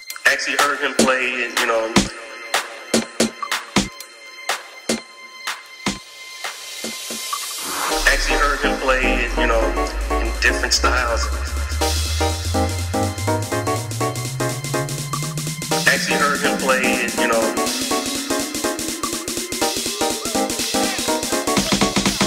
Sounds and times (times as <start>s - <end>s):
Music: 0.0s - 22.2s.